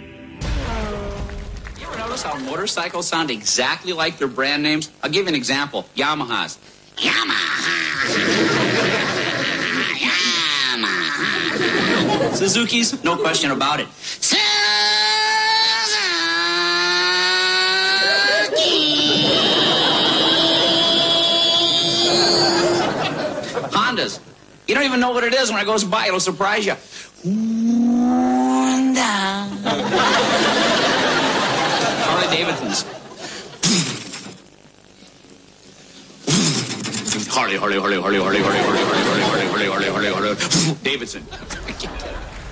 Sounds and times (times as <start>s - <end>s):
Speech: 1.8s - 8.2s, 12.2s - 16.2s, 23.7s - 26.8s, 32.0s - 32.9s, 37.1s - 42.2s.